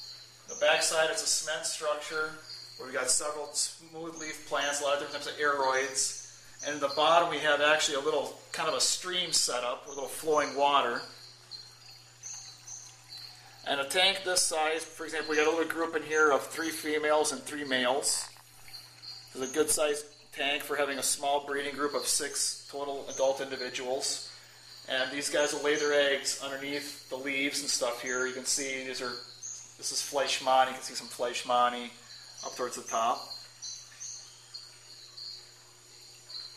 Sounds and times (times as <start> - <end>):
Speech: 0.5 - 11.2, 13.6 - 18.3, 19.4 - 24.3, 24.9 - 33.4.